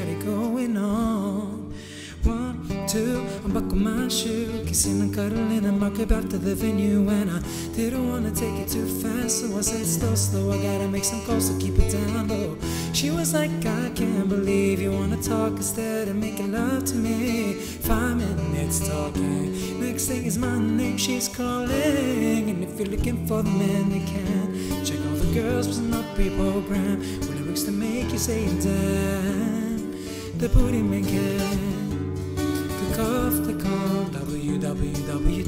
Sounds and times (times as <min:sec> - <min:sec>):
Guitar: 0:00.0 - 0:35.4.